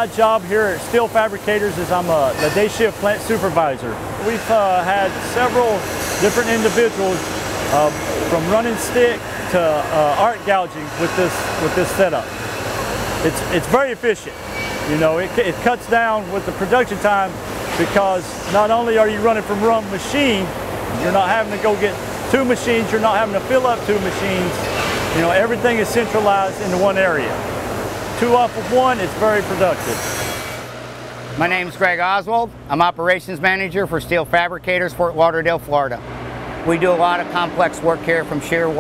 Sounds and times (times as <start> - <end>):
Speech: 0.0 - 12.3, 13.2 - 27.4, 28.2 - 30.0, 31.4 - 36.0, 36.6 - 38.8
Engine: 0.0 - 38.8.